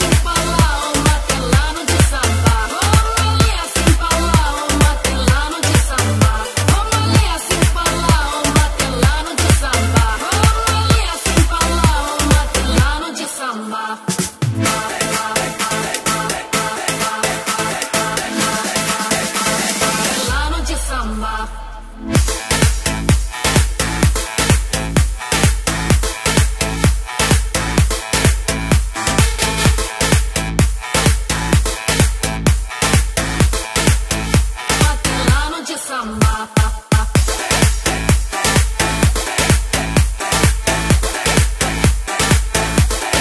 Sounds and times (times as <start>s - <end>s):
Electronic music: 0.0s - 43.2s.